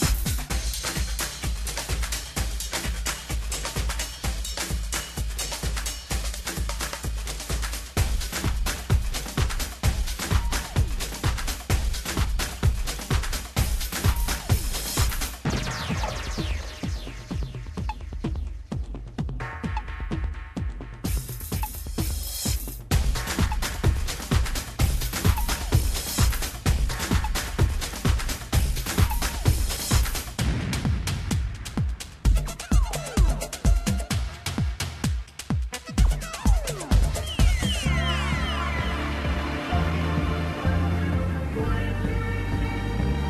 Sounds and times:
Music: 0.0 - 43.2.

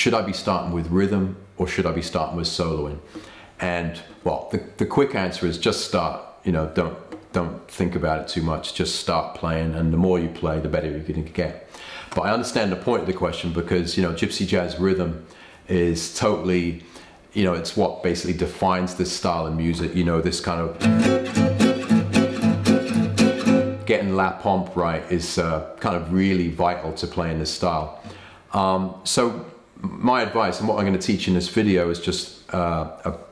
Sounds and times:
Speech: 0.0 - 20.8, 23.9 - 33.3
Acoustic guitar: 20.7 - 24.0.

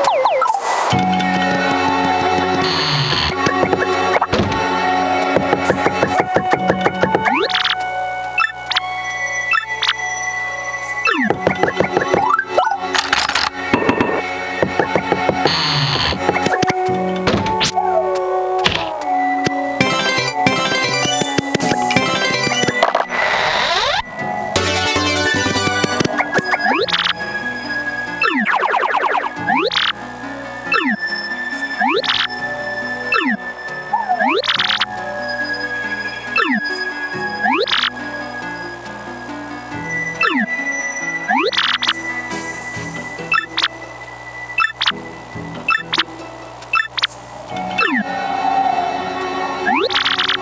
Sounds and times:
Music: 0.0 - 50.4.

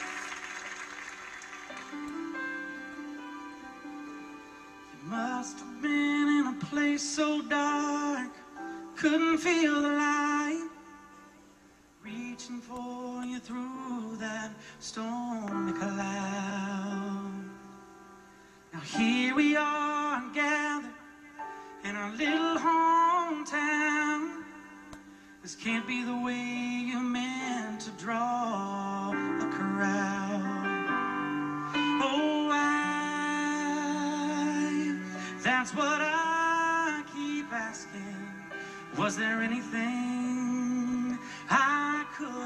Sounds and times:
Music: 0.0 - 42.4
Male singing: 5.0 - 11.1, 12.0 - 17.8, 18.7 - 31.0, 31.8 - 42.4.

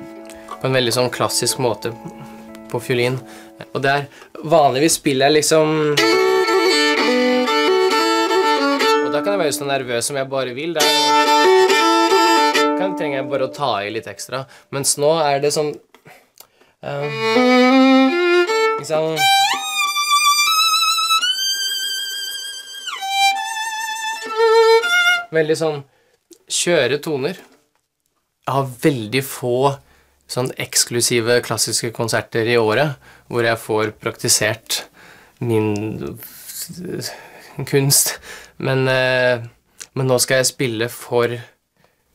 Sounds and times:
Speech: 0.6 - 2.1, 2.7 - 6.0, 9.0 - 11.0, 12.8 - 15.8, 16.8 - 17.3, 18.8 - 19.3, 25.3 - 27.5, 28.5 - 41.6
Violin, fiddle: 5.8 - 9.8, 10.8 - 13.7, 16.8 - 25.3.

